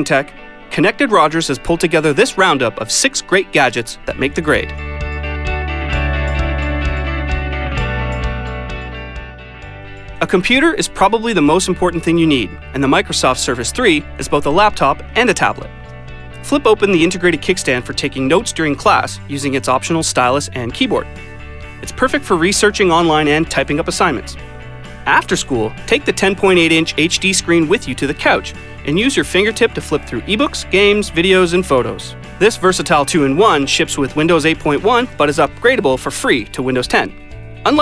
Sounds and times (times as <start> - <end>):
Speech: 0.0 - 4.8, 10.2 - 15.7, 16.4 - 21.1, 21.8 - 24.4, 25.1 - 37.8
Music: 0.0 - 37.8.